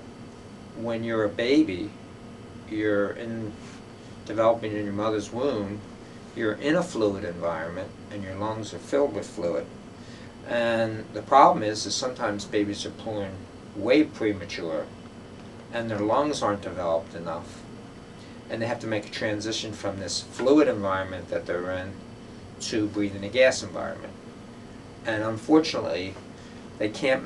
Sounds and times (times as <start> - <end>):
Speech: 0.8 - 2.0, 2.7 - 9.7, 10.5 - 15.0, 15.7 - 17.7, 18.5 - 22.0, 22.6 - 24.2, 25.0 - 26.2, 26.8 - 27.2.